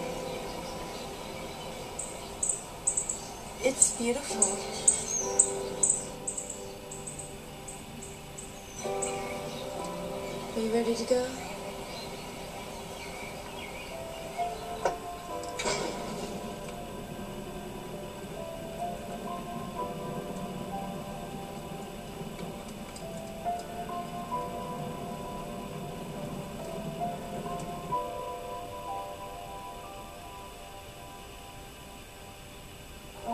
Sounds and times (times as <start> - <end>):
Music: 0.0 - 33.3.